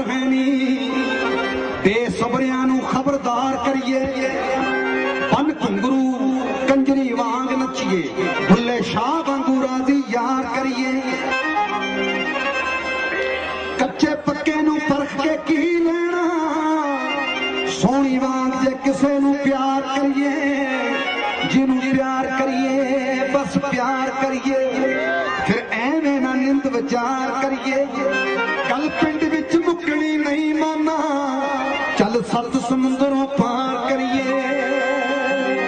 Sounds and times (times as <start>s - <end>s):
Accordion: 0.0s - 35.6s.